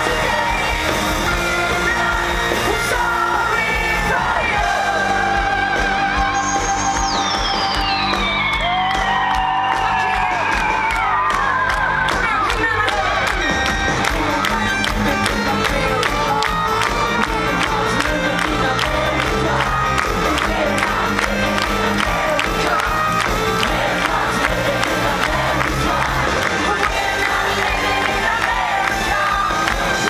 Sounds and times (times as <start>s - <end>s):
Applause: 0.0s - 30.0s
Cheering: 0.0s - 30.0s
Crowd: 0.0s - 30.0s
Music: 0.0s - 30.0s
Clapping: 7.0s - 30.0s
Speech: 12.2s - 13.4s.